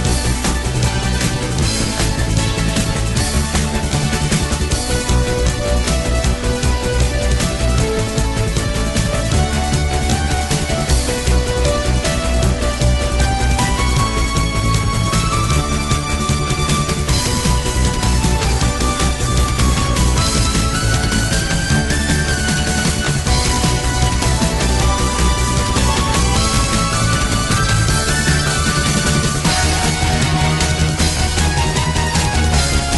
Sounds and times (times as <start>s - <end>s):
Music: 0.0s - 32.9s.